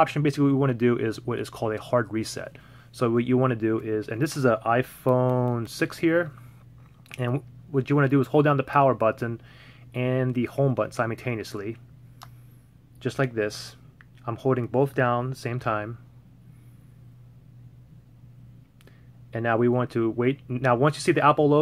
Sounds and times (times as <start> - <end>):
Speech: 0.0 - 6.4, 7.1 - 9.4, 10.0 - 11.8, 13.0 - 16.0, 19.3 - 21.6.